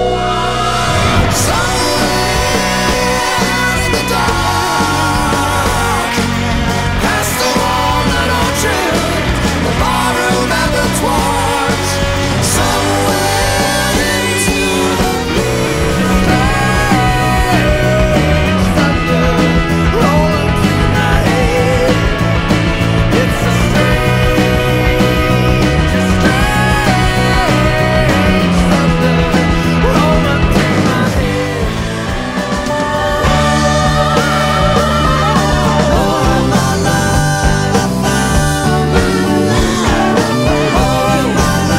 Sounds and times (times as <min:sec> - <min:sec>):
Music: 0:00.0 - 0:41.7.